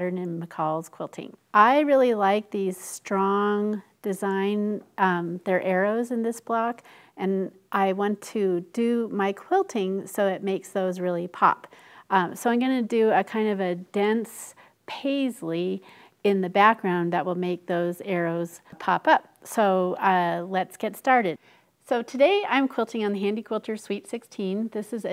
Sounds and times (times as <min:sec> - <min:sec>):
Speech: 0:00.0 - 0:25.1.